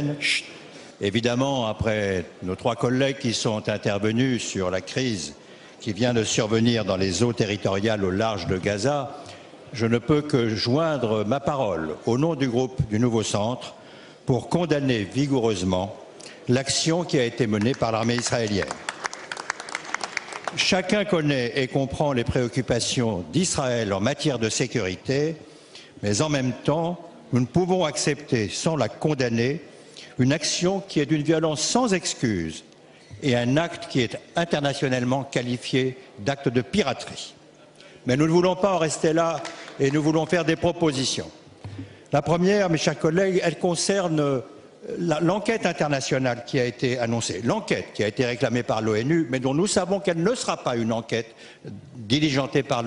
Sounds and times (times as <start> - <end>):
Speech: 0.0 - 18.8, 20.6 - 25.4, 26.0 - 37.4, 38.0 - 41.4, 42.2 - 52.8.